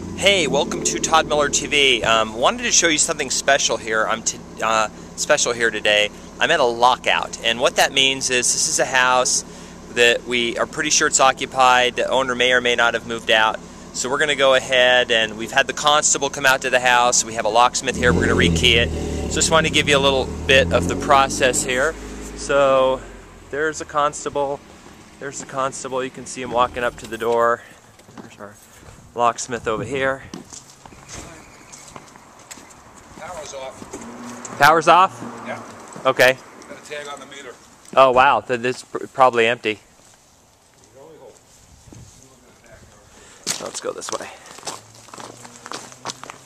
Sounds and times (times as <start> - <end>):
Outside, urban or manmade: 0.0 - 46.4
Speech: 0.2 - 24.6, 25.2 - 27.6, 28.2 - 28.6, 29.2 - 30.4, 33.2 - 33.8, 34.6 - 39.8, 42.2 - 44.5.